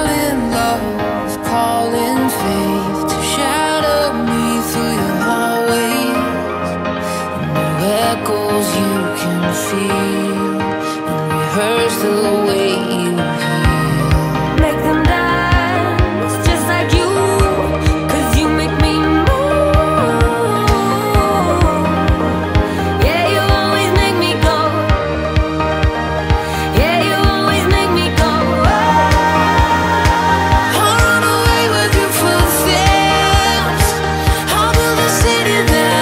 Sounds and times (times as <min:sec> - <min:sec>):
Music: 0:00.0 - 0:36.0.